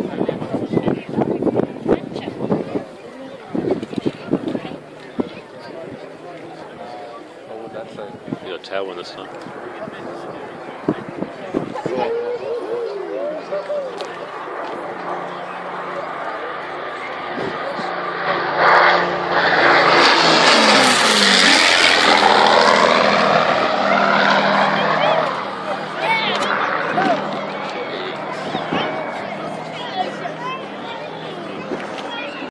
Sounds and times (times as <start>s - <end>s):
Speech: 0.0s - 18.2s, 23.8s - 32.5s.